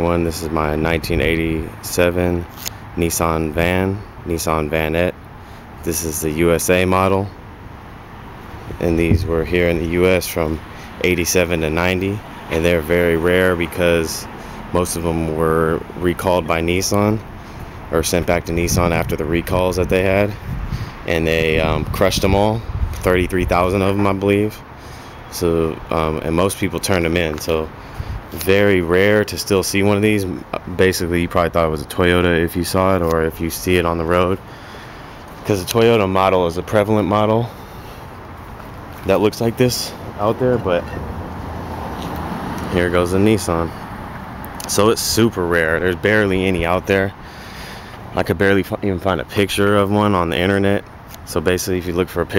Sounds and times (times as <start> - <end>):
Speech: 0.0 - 5.2, 5.8 - 7.4, 8.7 - 17.3, 17.9 - 20.4, 21.1 - 24.7, 25.3 - 27.7, 28.3 - 34.4, 35.4 - 37.6, 39.0 - 41.0, 42.7 - 43.8, 44.6 - 47.2, 48.2 - 52.3.